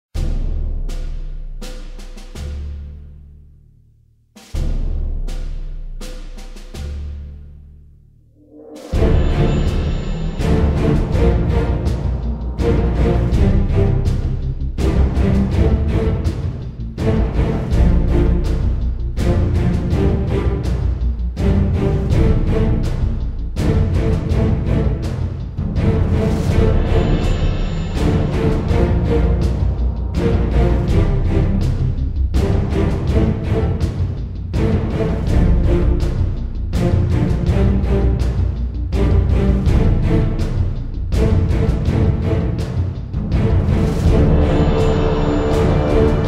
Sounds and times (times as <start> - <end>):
Timpani: 0.2 - 3.6, 4.4 - 46.2
Soundtrack music: 4.6 - 46.2.